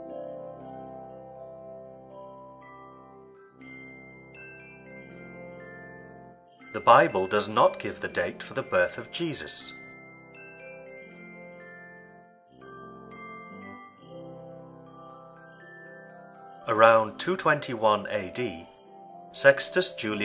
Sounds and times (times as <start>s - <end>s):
Music: 0.0s - 20.2s
Speech: 6.8s - 9.8s, 16.7s - 18.7s, 19.4s - 20.2s.